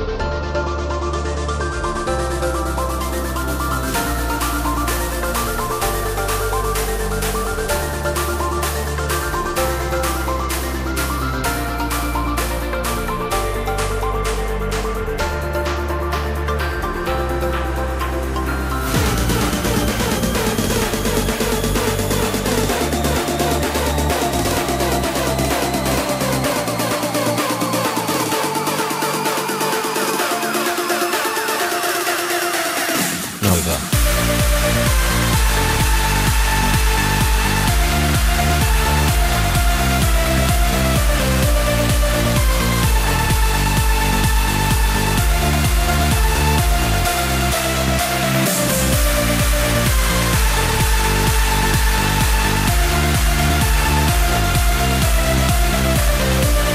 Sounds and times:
Music: 0:00.0 - 0:56.7.

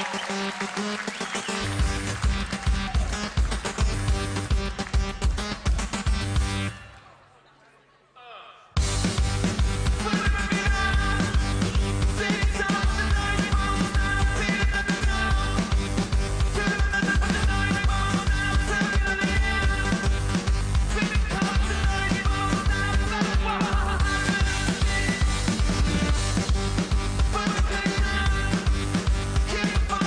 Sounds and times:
Music: 0:00.0 - 0:07.0, 0:08.8 - 0:30.0.

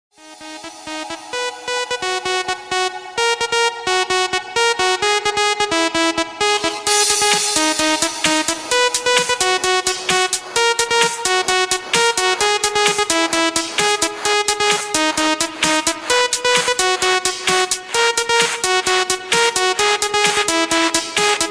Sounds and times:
Electronic dance music: 0:00.1 - 0:21.5.

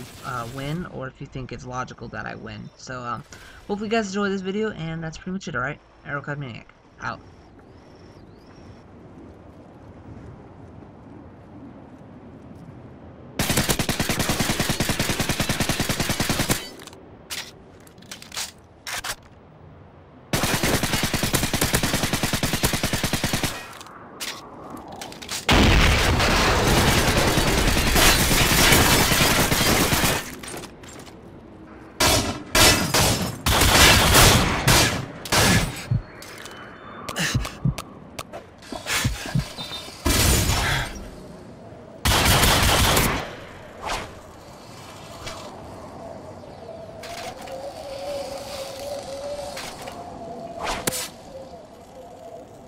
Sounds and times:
Fusillade: 0:13.4 - 0:16.7, 0:20.4 - 0:23.8, 0:25.5 - 0:30.4, 0:42.1 - 0:43.3.

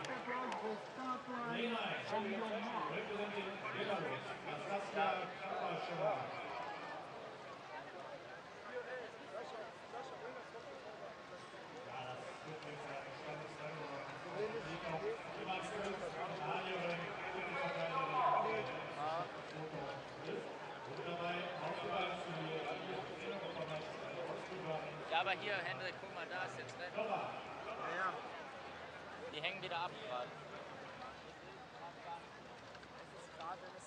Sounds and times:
Speech: 0:00.0 - 0:33.8.

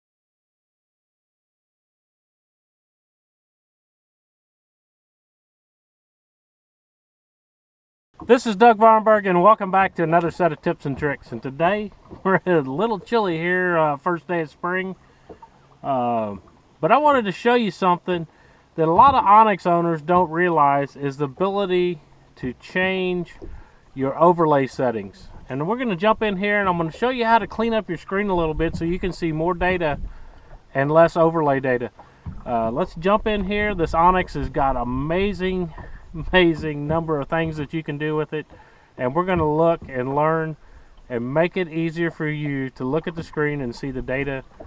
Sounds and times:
Speech: 0:08.3 - 0:15.0, 0:15.8 - 0:23.4, 0:24.0 - 0:30.0, 0:30.8 - 0:31.9, 0:32.5 - 0:38.4, 0:39.0 - 0:44.5.

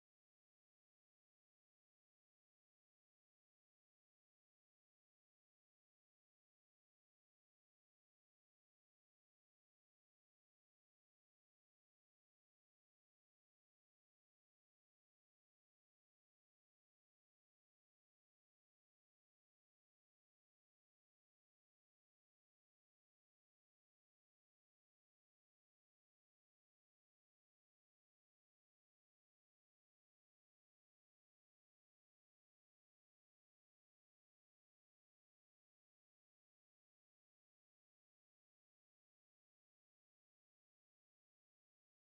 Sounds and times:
Silence: 0:00.0 - 0:42.1.

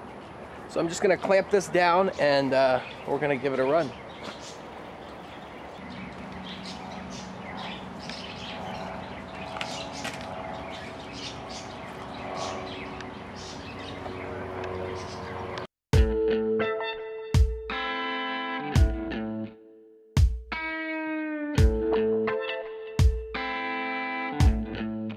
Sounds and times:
Outside, rural or natural: 0:00.0 - 0:16.3
Music: 0:16.0 - 0:25.1.

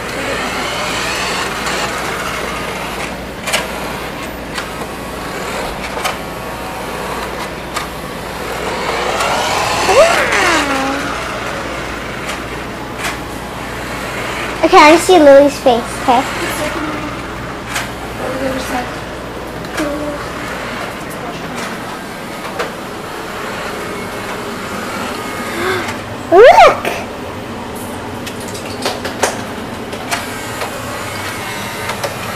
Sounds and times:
Inside, small room: 0:00.0 - 0:32.3.

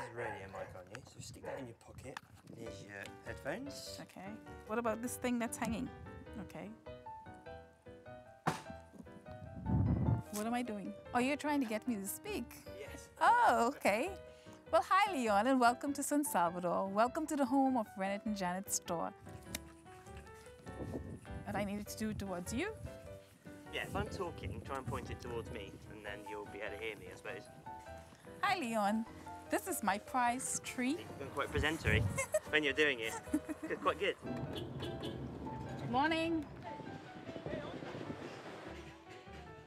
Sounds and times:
Music: 0:00.0 - 0:39.6.

